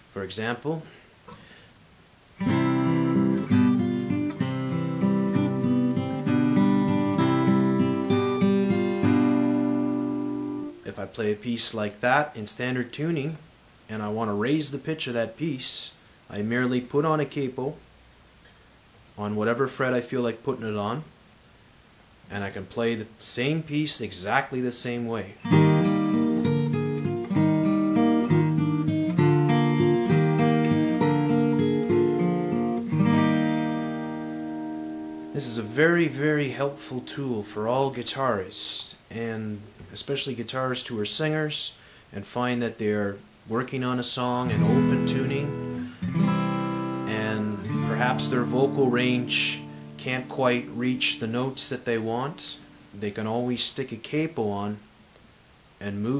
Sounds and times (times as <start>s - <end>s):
Speech: 0.1s - 1.0s, 10.8s - 17.8s, 19.2s - 21.1s, 22.3s - 25.4s, 35.4s - 45.6s, 47.1s - 54.9s, 55.8s - 56.1s.